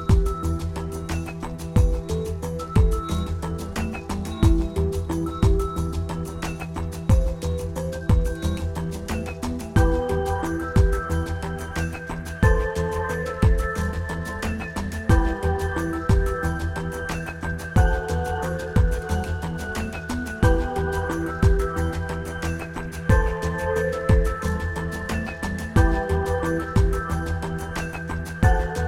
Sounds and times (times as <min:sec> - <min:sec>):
Music: 0:00.0 - 0:28.8.